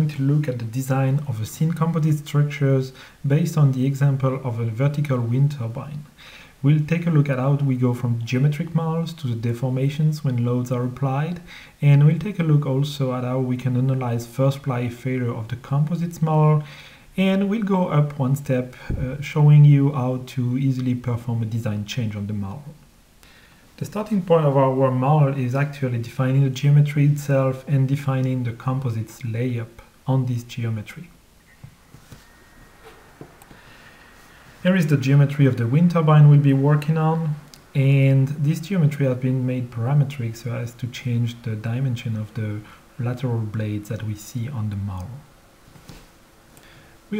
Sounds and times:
Speech: 0.0 - 22.8, 23.8 - 31.2, 34.6 - 45.3.

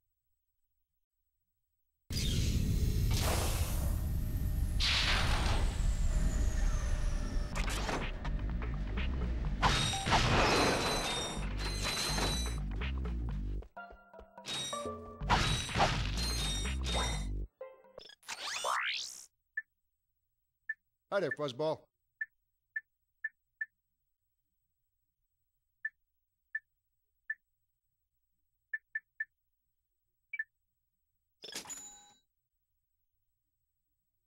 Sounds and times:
Music: 7.5 - 18.2
Speech: 21.1 - 21.9.

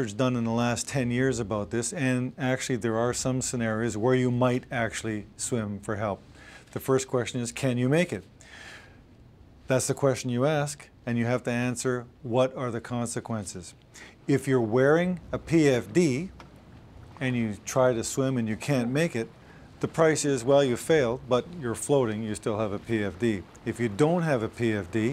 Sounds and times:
Speech: 0.0 - 8.3, 9.7 - 16.4, 17.2 - 25.1.

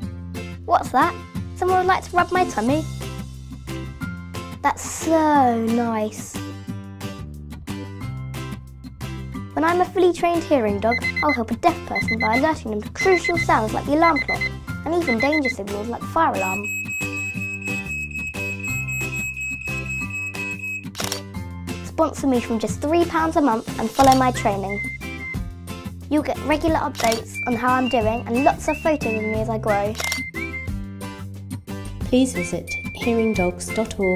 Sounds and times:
Music: 0.0 - 34.1
Speech: 0.7 - 2.9, 4.6 - 6.4, 9.6 - 16.7, 21.9 - 24.8, 26.1 - 30.0, 32.1 - 34.1.

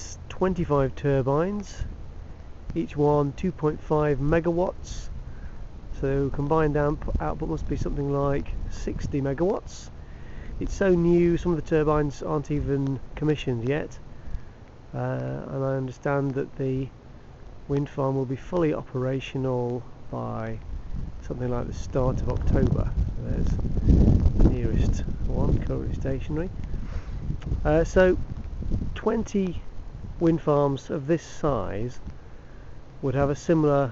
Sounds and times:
Speech: 0.0 - 1.9, 2.7 - 5.1, 6.0 - 9.9, 10.6 - 14.0, 14.9 - 16.9, 17.7 - 20.6, 21.2 - 23.6, 24.5 - 26.5, 27.6 - 28.2, 29.0 - 32.0, 33.0 - 33.9
Rustling leaves: 0.0 - 33.9
Wind noise (microphone): 4.2 - 13.0, 20.5 - 30.4.

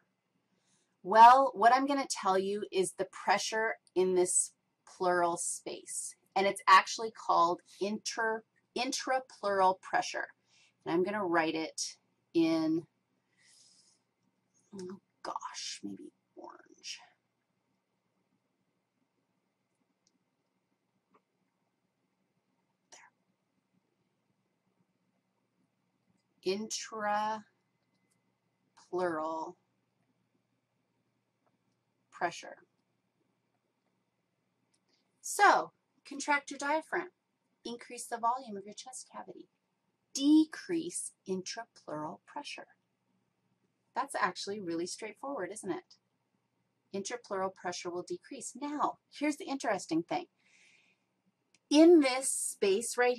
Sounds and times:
Speech: 1.1 - 10.3, 10.9 - 12.8, 14.8 - 17.0, 26.5 - 27.5, 28.9 - 29.5, 35.3 - 37.1, 37.7 - 39.4, 40.2 - 42.7, 44.0 - 45.9, 47.0 - 50.3, 51.7 - 53.1.

